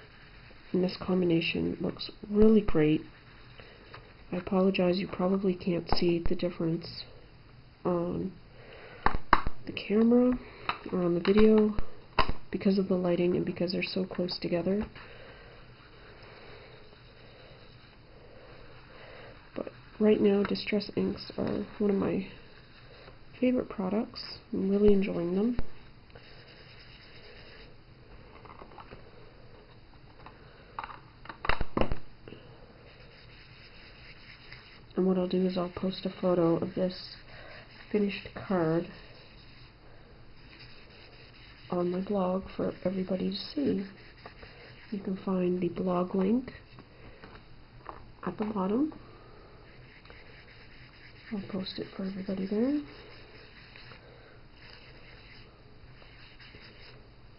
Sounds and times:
Speech: 0.7s - 3.1s, 4.3s - 7.1s, 7.9s - 8.4s, 9.7s - 11.8s, 12.6s - 14.9s, 19.6s - 22.4s, 23.4s - 25.6s, 35.0s - 37.2s, 37.9s - 39.0s, 41.7s - 44.0s, 44.9s - 46.6s, 48.2s - 49.0s, 51.3s - 52.9s.

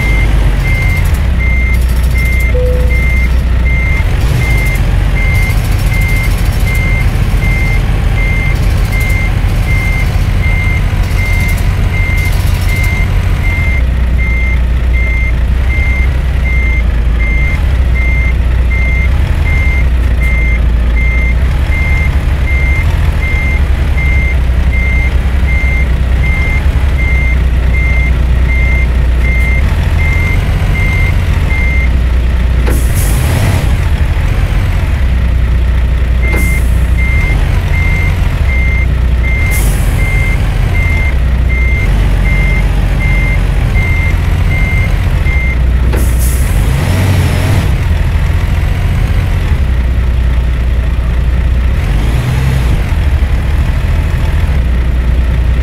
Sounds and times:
Reversing beeps: 0.0s - 31.9s, 36.2s - 45.6s.

